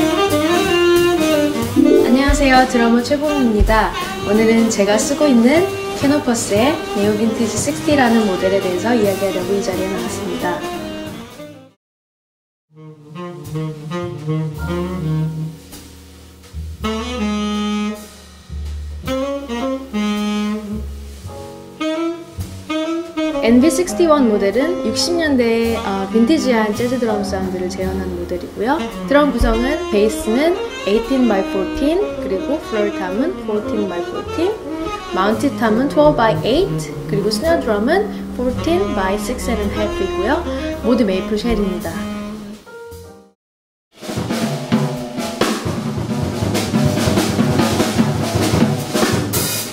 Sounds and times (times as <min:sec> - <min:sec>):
Drum kit: 0:00.0 - 0:11.6, 0:13.2 - 0:31.4, 0:32.7 - 0:43.2, 0:44.0 - 0:49.7
Bass drum: 0:01.8 - 0:03.0, 0:03.6 - 0:04.1, 0:18.4 - 0:21.5, 0:29.3 - 0:30.4, 0:35.0 - 0:42.3
Speech: 0:01.8 - 0:10.7, 0:23.4 - 0:34.6, 0:35.2 - 0:42.2.